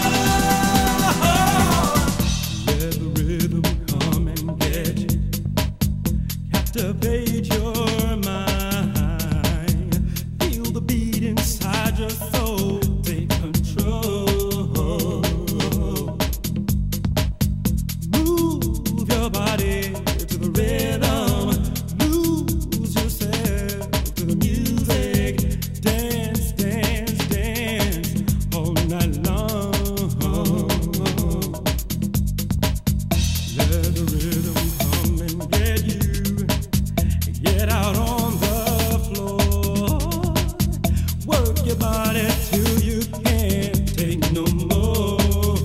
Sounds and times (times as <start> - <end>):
Funk: 0.0 - 45.6.